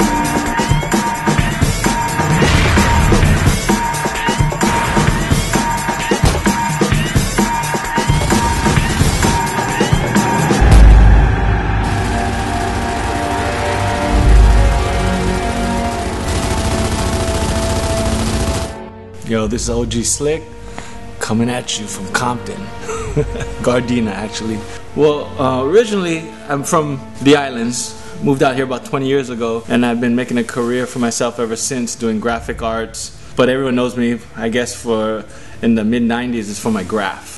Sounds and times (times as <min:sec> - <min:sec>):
Music: 0:00.0 - 0:37.3.